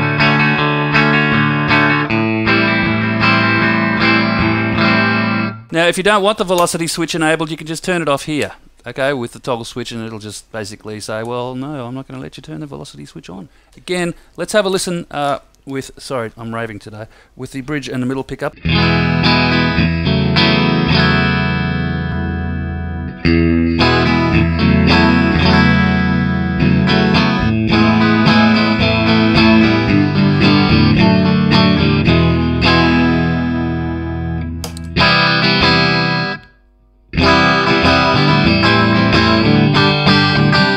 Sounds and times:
Effects unit: 0:00.0 - 0:05.7, 0:18.6 - 0:40.7
Guitar: 0:00.0 - 0:09.0, 0:17.9 - 0:40.7
Distortion: 0:00.0 - 0:40.7
Inside, small room: 0:00.0 - 0:40.7.

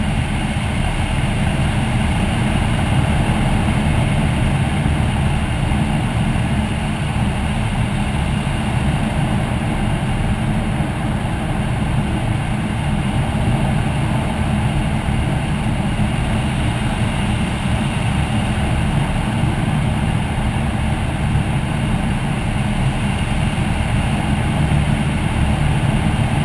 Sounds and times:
Aircraft: 0:00.0 - 0:26.4
Heavy engine (low frequency): 0:00.0 - 0:26.4
Medium engine (mid frequency): 0:00.0 - 0:26.4.

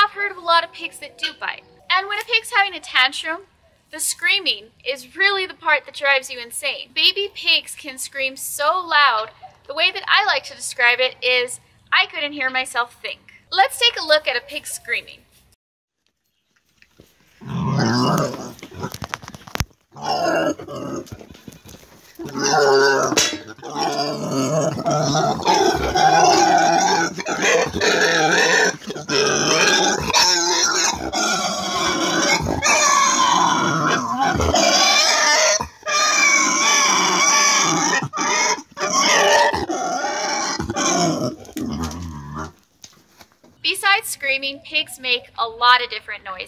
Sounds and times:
Speech: 0:00.0 - 0:15.3, 0:43.6 - 0:46.4
Pig: 0:17.4 - 0:19.4, 0:20.0 - 0:42.6.

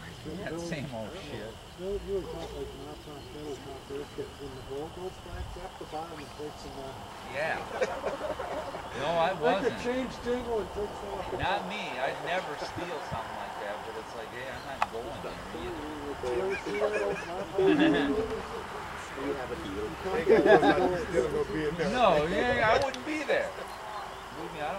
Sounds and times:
Speech: 0:00.0 - 0:07.8, 0:08.9 - 0:23.7.

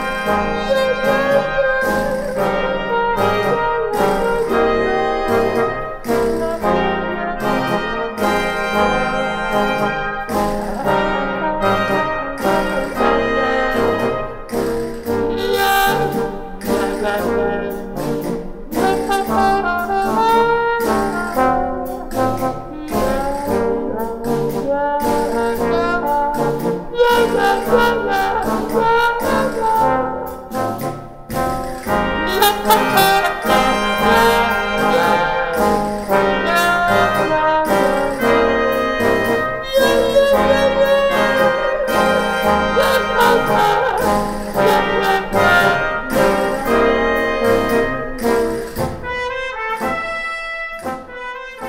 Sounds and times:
Trumpet: 0:00.0 - 0:51.6.

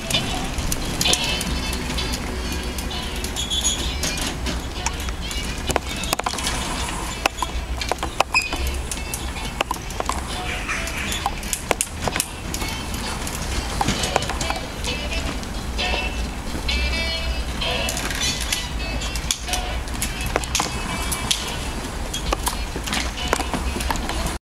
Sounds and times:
Bicycle: 0:00.0 - 0:24.4
Music: 0:00.0 - 0:24.4.

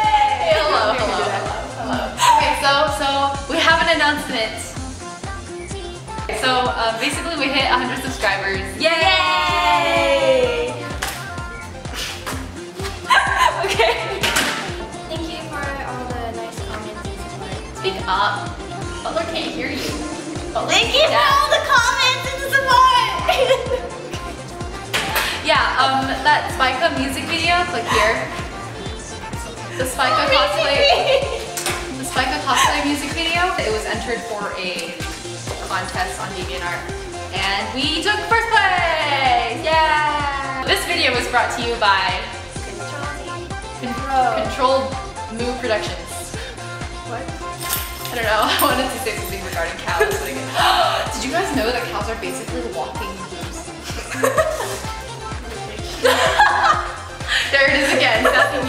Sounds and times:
Music: 0:00.0 - 0:58.6.

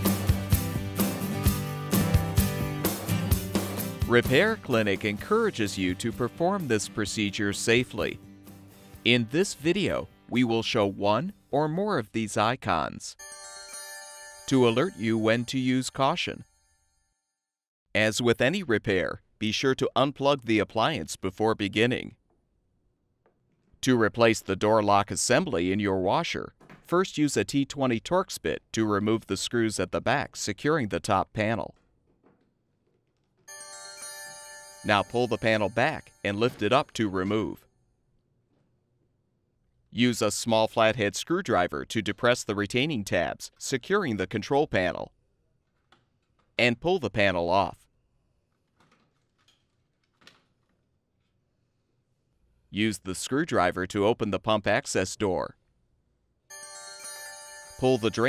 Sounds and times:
Music: 0:00.0 - 0:11.6, 0:13.2 - 0:15.6, 0:33.5 - 0:36.6, 0:56.5 - 0:58.2
Speech: 0:04.1 - 0:08.2, 0:09.1 - 0:13.2, 0:14.5 - 0:16.4, 0:18.0 - 0:22.2, 0:23.8 - 0:31.8, 0:34.9 - 0:37.6, 0:40.0 - 0:45.1, 0:46.6 - 0:47.9, 0:52.7 - 0:55.6, 0:57.8 - 0:58.2.

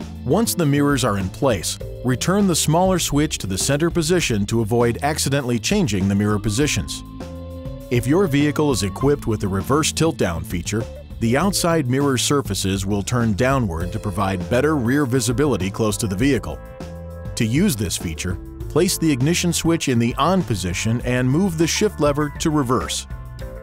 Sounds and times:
Music: 0:00.0 - 0:23.6
Speech: 0:00.3 - 0:07.0, 0:07.9 - 0:16.6, 0:17.4 - 0:23.1.

